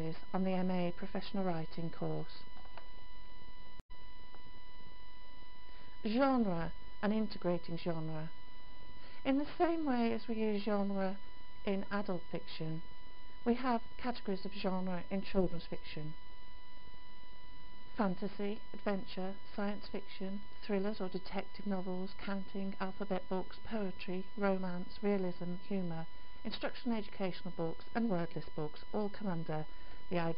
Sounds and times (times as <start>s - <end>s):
Speech: 0.0s - 2.4s, 6.1s - 8.3s, 9.2s - 12.8s, 13.5s - 16.2s, 18.0s - 30.3s.